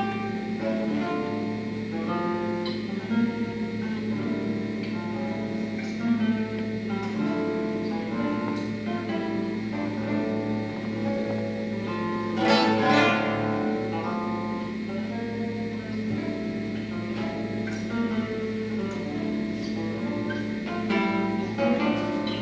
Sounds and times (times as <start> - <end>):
Guitar: 0.0 - 22.4.